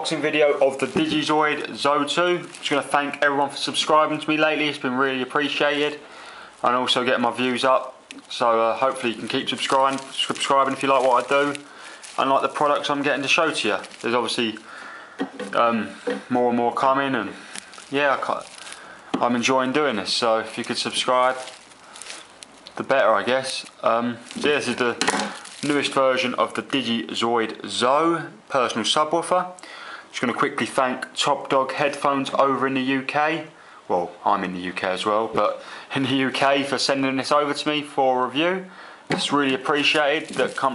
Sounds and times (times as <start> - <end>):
Speech: 0.0 - 6.0, 6.6 - 14.7, 15.4 - 18.5, 19.2 - 21.5, 22.7 - 40.7.